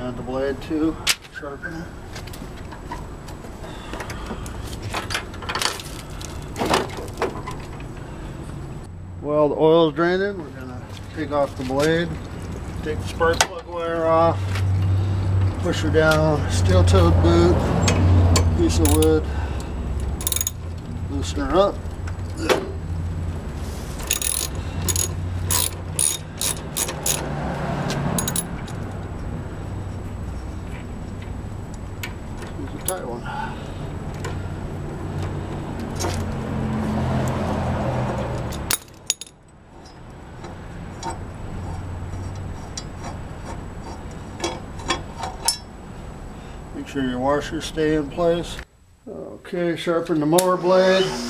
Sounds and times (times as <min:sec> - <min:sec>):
Speech: 0:00.0 - 0:01.9, 0:09.2 - 0:12.2, 0:12.8 - 0:14.4, 0:15.6 - 0:17.6, 0:21.1 - 0:21.8, 0:32.6 - 0:33.3, 0:46.8 - 0:51.3
Vehicle: 0:00.0 - 0:51.3.